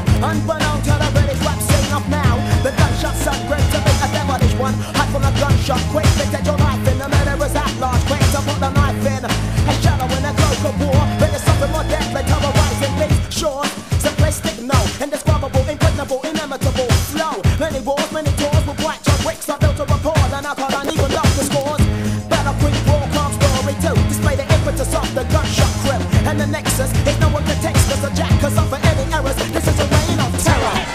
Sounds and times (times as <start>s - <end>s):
Music: 0.0s - 30.9s.